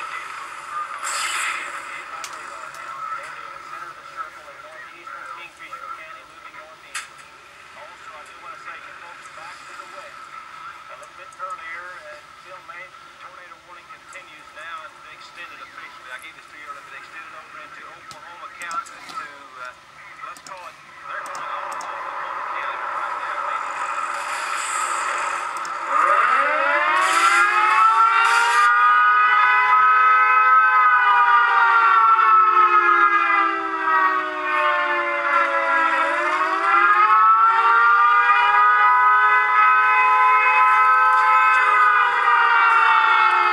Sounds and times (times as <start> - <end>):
Siren: 0.0 - 6.8, 20.9 - 43.5
Speech: 1.8 - 7.2, 7.8 - 23.7.